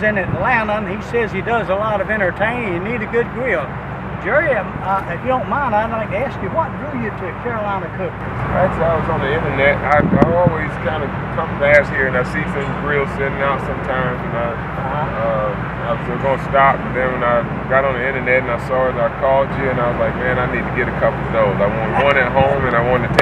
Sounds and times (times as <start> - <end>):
Speech: 0.0 - 23.2.